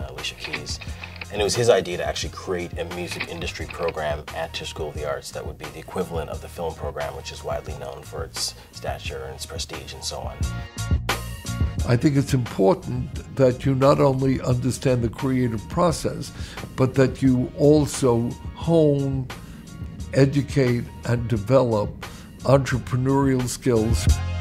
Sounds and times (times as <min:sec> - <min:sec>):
Speech: 0:00.0 - 0:10.5, 0:11.8 - 0:19.3, 0:20.2 - 0:24.2
Background music: 0:00.0 - 0:24.4.